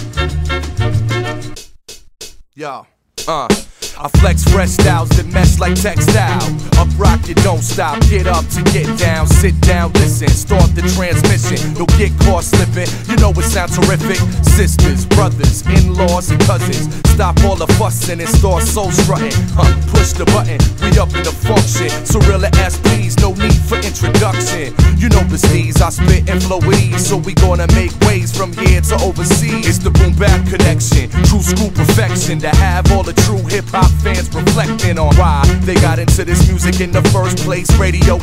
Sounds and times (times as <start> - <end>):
Music: 0.0 - 2.4, 3.0 - 38.2.